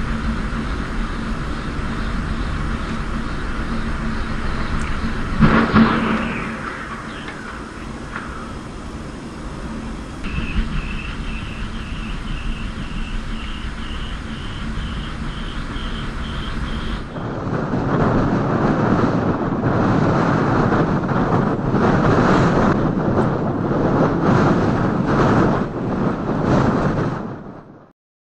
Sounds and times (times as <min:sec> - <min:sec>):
Wind noise (microphone): 0:00.0 - 0:27.9.